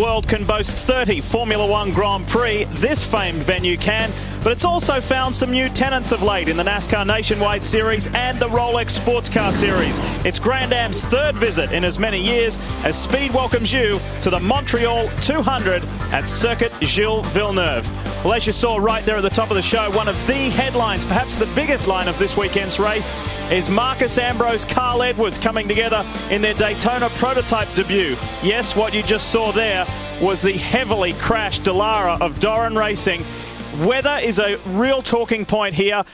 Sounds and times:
Music: 0.0 - 36.1
Speech: 0.0 - 36.1.

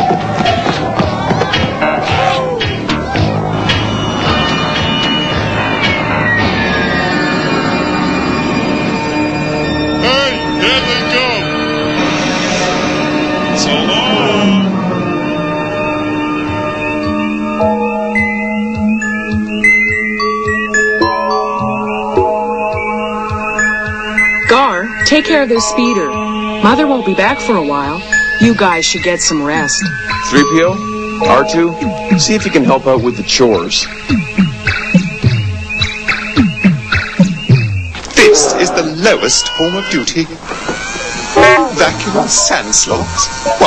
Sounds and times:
Music: 0.0 - 43.6.

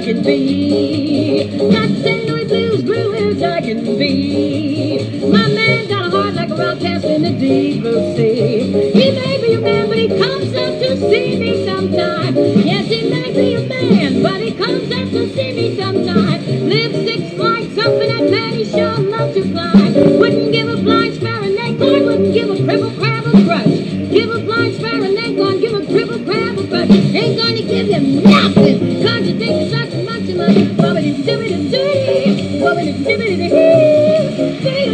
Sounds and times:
Music: 0.0 - 34.9
Synthetic singing: 0.0 - 34.9.

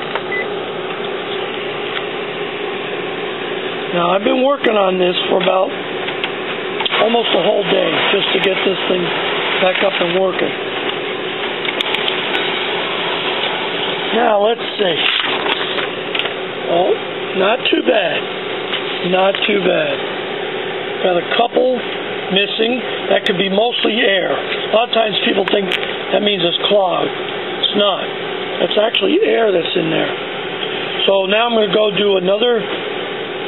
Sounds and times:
Printer: 0.0 - 33.4
Speech: 3.9 - 5.8, 6.9 - 10.6, 14.1 - 15.1, 16.6 - 18.3, 19.0 - 20.0, 21.0 - 30.2, 31.0 - 32.7.

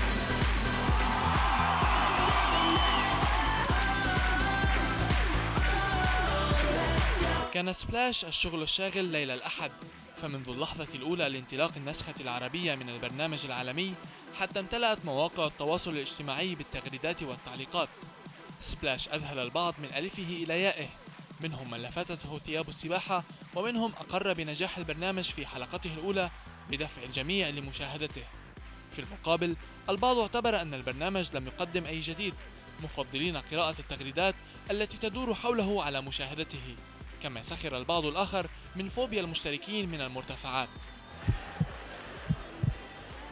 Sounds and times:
Music: 0.0 - 43.3
Speech: 7.5 - 17.9, 18.6 - 28.3, 28.9 - 40.7.

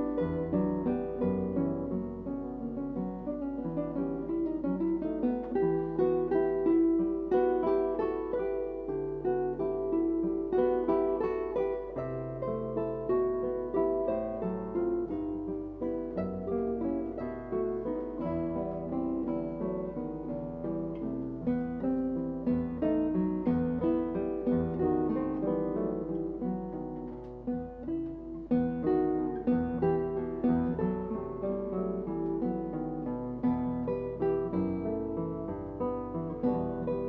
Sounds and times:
Plucked string instrument: 0.0 - 37.0.

